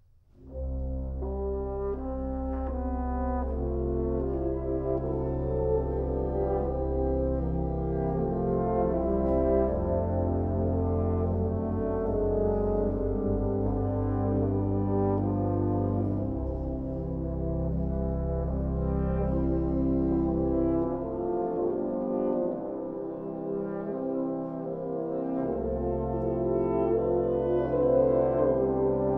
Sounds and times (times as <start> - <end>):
French horn: 0.4 - 29.1.